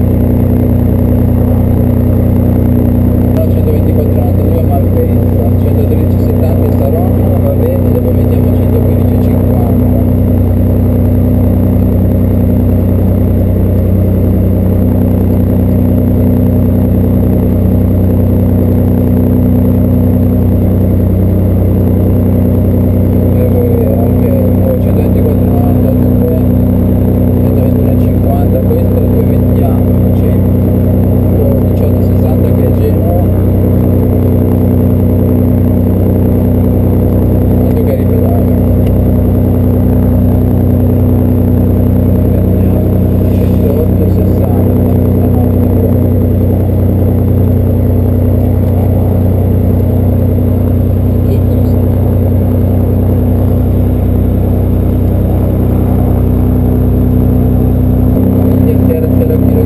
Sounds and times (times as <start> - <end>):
Speech: 3.4 - 10.1, 23.3 - 26.5, 27.4 - 30.5, 31.4 - 33.4, 37.6 - 38.6, 42.4 - 45.9, 51.2 - 51.8, 58.6 - 59.6.